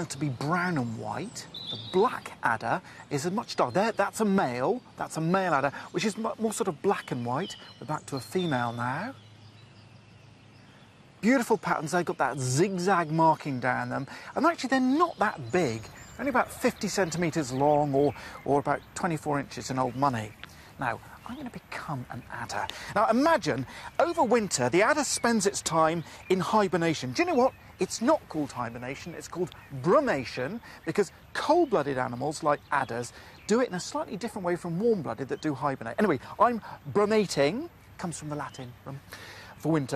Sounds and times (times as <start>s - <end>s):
Speech: 0.0s - 9.2s, 11.2s - 39.9s
Outside, rural or natural: 0.0s - 39.9s.